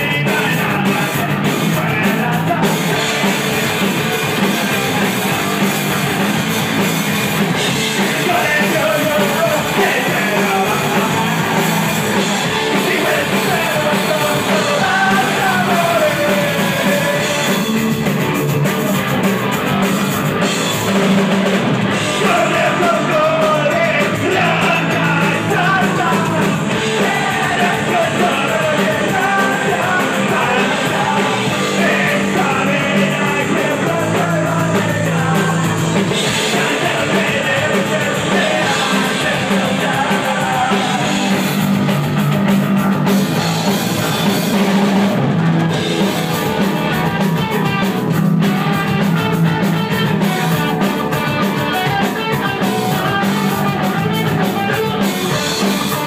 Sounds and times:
Singing: 0:00.0 - 0:06.9, 0:07.6 - 0:18.0, 0:21.9 - 0:42.0, 0:46.4 - 0:56.0
Drum: 0:00.0 - 0:56.0
Drum kit: 0:00.0 - 0:56.0
Punk rock: 0:00.0 - 0:56.0.

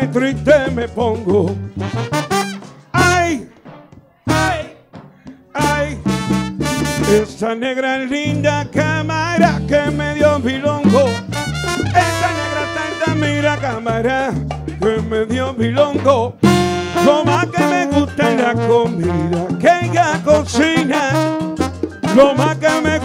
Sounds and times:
Song: 0:00.0 - 0:07.5, 0:08.2 - 0:23.0
Salsa music: 0:00.0 - 0:23.0
Ska: 0:00.0 - 0:23.0
Singing: 0:04.2 - 0:04.8.

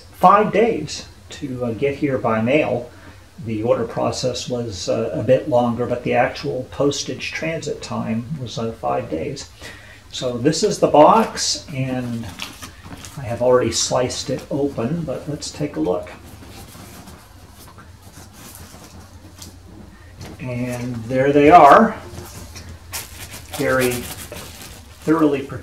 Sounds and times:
Speech: 0:00.0 - 0:09.5, 0:10.1 - 0:12.5, 0:13.1 - 0:16.2, 0:20.4 - 0:22.1, 0:23.5 - 0:24.2, 0:25.0 - 0:25.6.

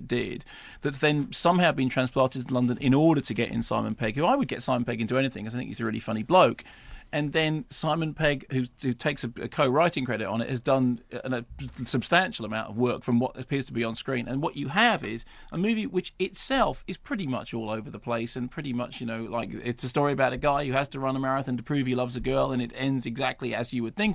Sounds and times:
Speech: 0:00.0 - 0:24.1.

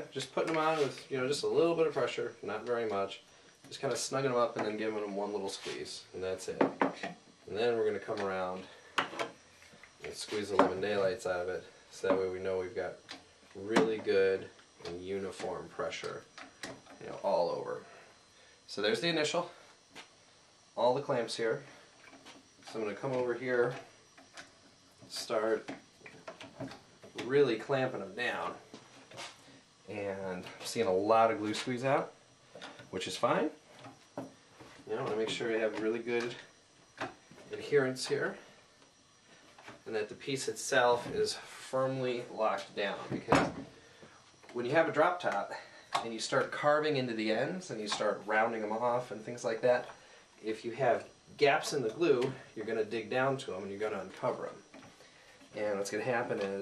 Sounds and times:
Speech: 0:00.0 - 0:08.7, 0:10.0 - 0:16.3, 0:17.0 - 0:17.9, 0:18.7 - 0:19.6, 0:20.8 - 0:21.7, 0:22.7 - 0:23.9, 0:25.1 - 0:25.7, 0:27.2 - 0:28.6, 0:29.9 - 0:32.2, 0:32.9 - 0:33.6, 0:34.9 - 0:36.5, 0:37.5 - 0:38.4, 0:39.8 - 0:43.6, 0:44.5 - 0:54.6, 0:55.6 - 0:56.6.

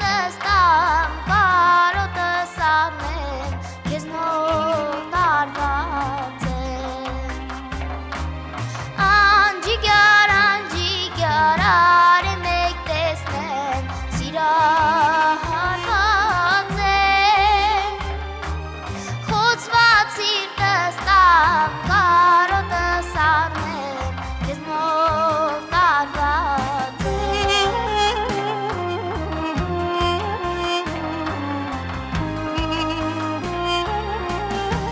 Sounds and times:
Music of Asia: 0:00.0 - 0:34.9.

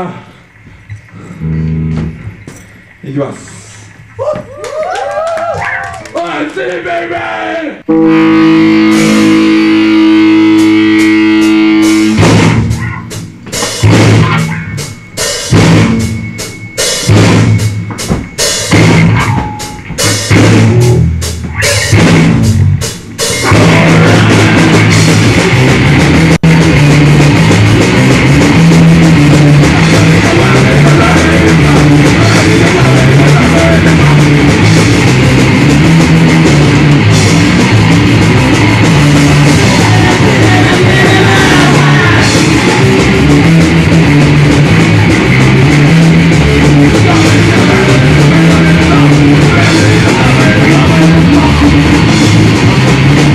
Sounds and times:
Music: 0:00.4 - 0:03.1, 0:07.8 - 0:53.3.

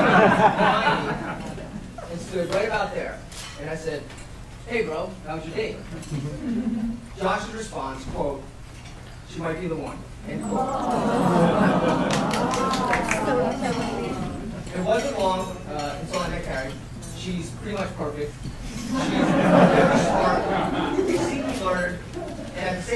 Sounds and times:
Male speech, man speaking: 0:02.1 - 0:04.1, 0:04.7 - 0:05.9, 0:07.2 - 0:08.5, 0:09.3 - 0:10.5, 0:14.7 - 0:18.4, 0:19.1 - 0:22.0, 0:22.6 - 0:22.9.

